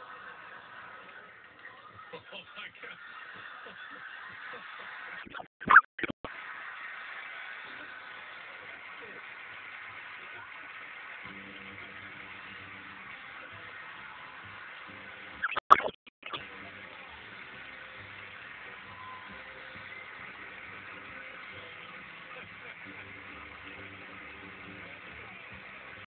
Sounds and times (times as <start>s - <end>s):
Music: 0.0s - 5.3s, 6.4s - 26.0s
Speech: 10.0s - 14.0s, 21.2s - 26.0s.